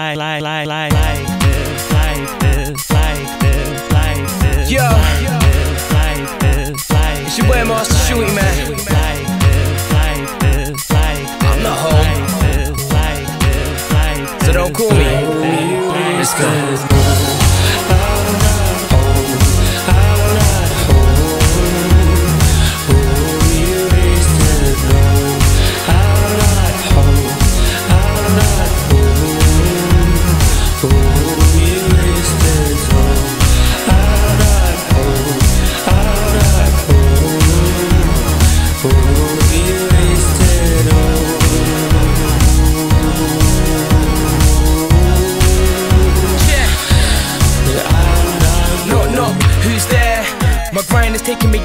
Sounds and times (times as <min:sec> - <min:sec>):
Music: 0:00.0 - 0:51.6.